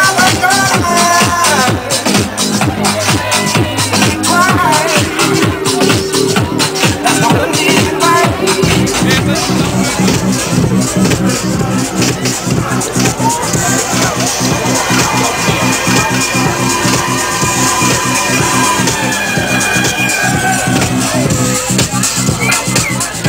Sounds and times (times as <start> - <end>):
Speech: 0.0 - 19.2, 19.8 - 23.2
Music: 0.0 - 23.2.